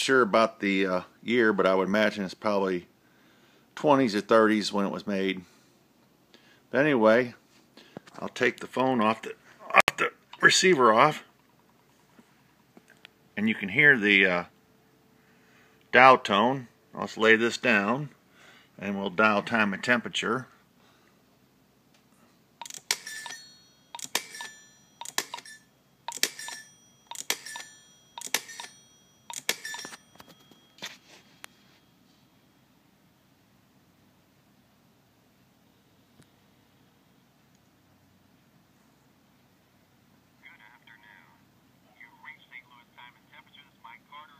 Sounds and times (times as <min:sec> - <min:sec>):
Speech: 0:00.0 - 0:02.9, 0:03.8 - 0:05.5, 0:06.7 - 0:07.4, 0:08.2 - 0:11.3, 0:13.4 - 0:14.5, 0:15.9 - 0:18.2, 0:18.8 - 0:20.5, 0:40.4 - 0:44.3
Telephone: 0:22.6 - 0:31.8.